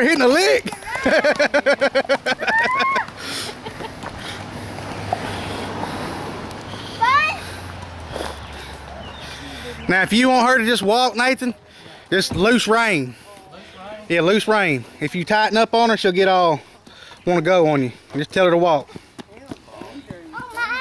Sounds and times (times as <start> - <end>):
Clip-clop: 0.0 - 9.6, 16.3 - 20.8.